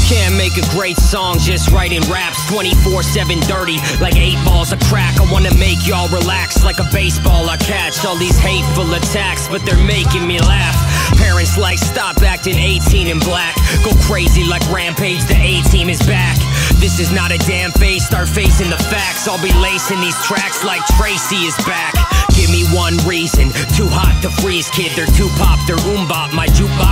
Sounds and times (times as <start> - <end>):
Funk: 0.0 - 26.9.